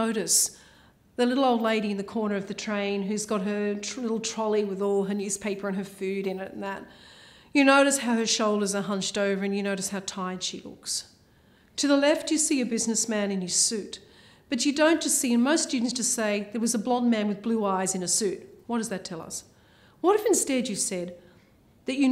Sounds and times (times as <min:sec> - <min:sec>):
Speech: 0:00.0 - 0:00.6, 0:01.2 - 0:06.9, 0:07.6 - 0:11.1, 0:11.8 - 0:21.2, 0:21.9 - 0:22.1.